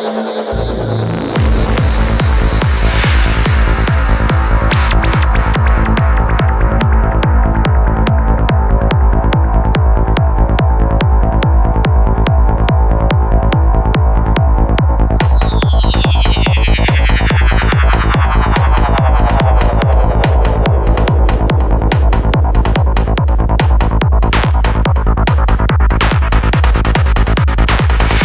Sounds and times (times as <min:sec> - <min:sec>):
Sampler: 0:00.1 - 0:09.6, 0:14.8 - 0:26.4.